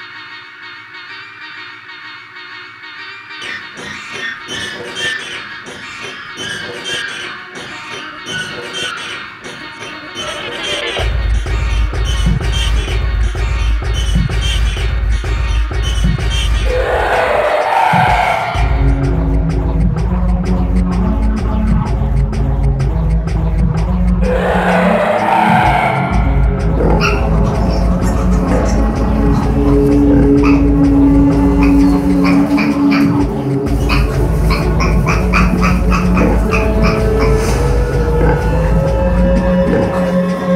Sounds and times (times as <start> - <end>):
Music: 0.0 - 40.5
Oink: 29.4 - 40.5.